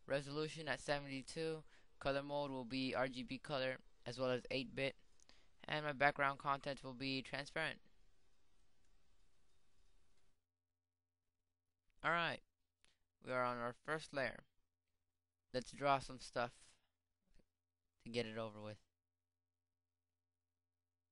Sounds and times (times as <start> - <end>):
Speech: 0.0 - 5.0, 5.6 - 7.8, 12.0 - 12.5, 13.2 - 14.5, 15.6 - 16.8, 18.1 - 18.9.